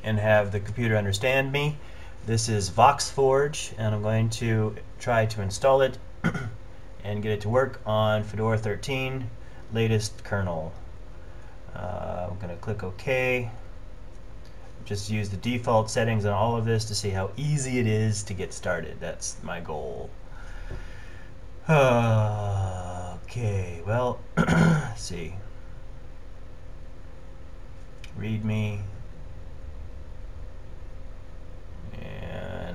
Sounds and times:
Male speech, man speaking: 0.0 - 6.0, 7.0 - 10.8, 11.7 - 13.6, 14.8 - 20.1, 21.7 - 24.2, 24.8 - 25.4, 28.1 - 29.0, 31.9 - 32.7.

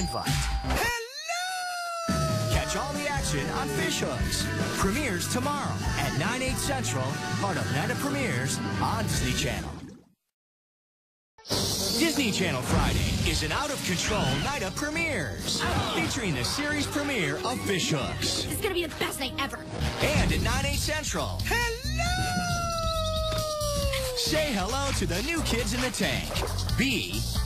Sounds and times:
Music: 0.0 - 0.8, 2.1 - 9.5, 11.4 - 27.4
Speech: 0.0 - 1.2, 2.4 - 9.7, 12.0 - 22.7, 23.6 - 27.3.

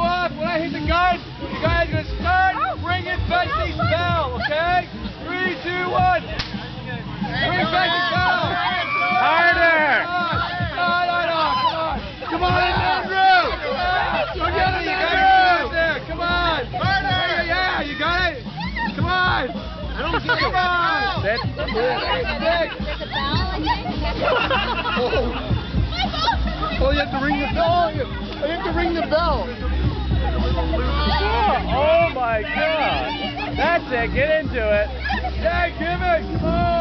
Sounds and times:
Crowd: 0.0 - 36.8.

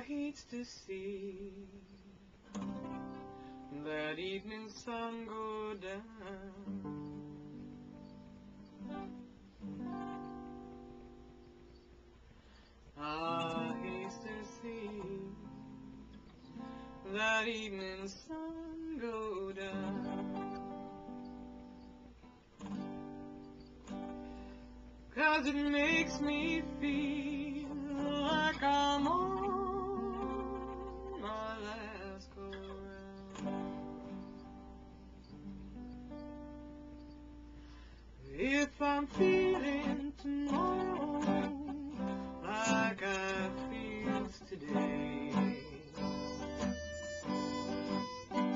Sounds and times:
Acoustic guitar: 0.0 - 48.5.

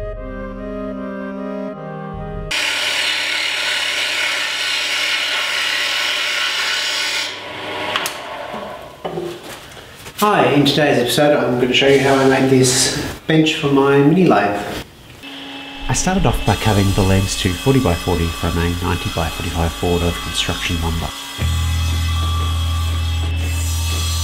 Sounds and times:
Speech: 10.2 - 14.8, 15.9 - 21.1.

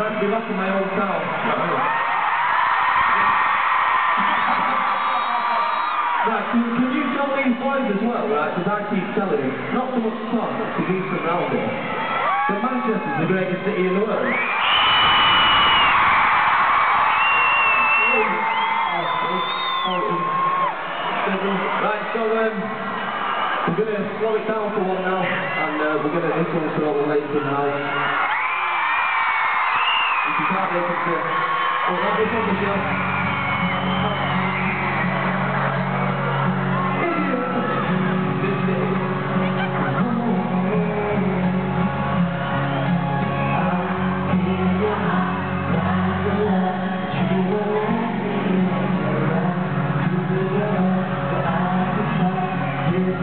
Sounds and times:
Speech: 0.0 - 1.8, 6.2 - 11.8, 12.5 - 14.3, 21.3 - 22.7, 23.7 - 27.9, 30.3 - 31.3, 31.9 - 32.9.

